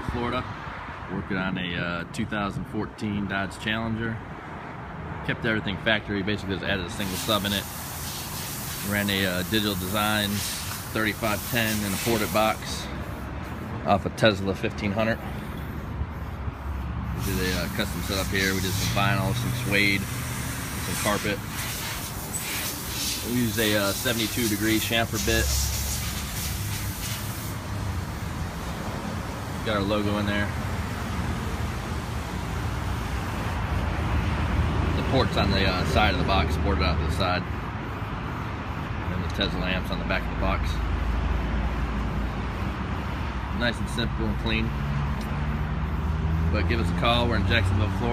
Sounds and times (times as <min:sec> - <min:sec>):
Speech: 0:00.0 - 0:00.5, 0:01.1 - 0:04.2, 0:05.2 - 0:07.7, 0:08.8 - 0:12.9, 0:13.8 - 0:15.3, 0:17.2 - 0:20.1, 0:20.8 - 0:21.4, 0:23.2 - 0:25.6, 0:29.6 - 0:30.6, 0:34.9 - 0:37.5, 0:39.1 - 0:40.8, 0:43.5 - 0:44.8, 0:46.5 - 0:48.1
Car: 0:00.0 - 0:48.1.